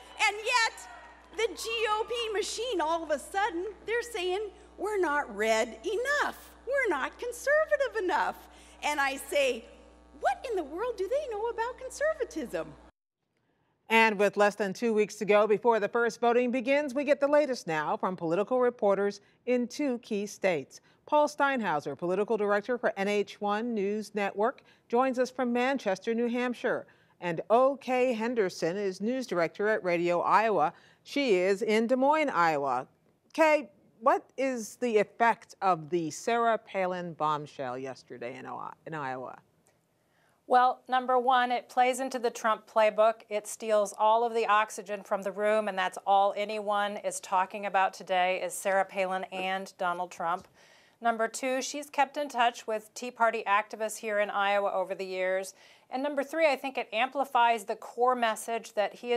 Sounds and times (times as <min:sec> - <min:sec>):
Speech: 0:00.2 - 0:12.8, 0:13.9 - 0:39.4, 0:40.5 - 0:59.1.